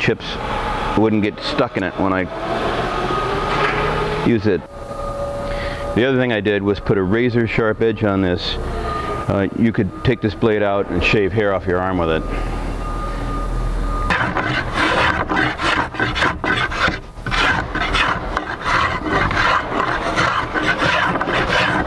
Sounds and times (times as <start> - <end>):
Speech: 0.0 - 0.4, 1.0 - 2.3, 4.3 - 4.7, 6.0 - 8.6, 9.3 - 12.3
Wood: 14.1 - 21.8.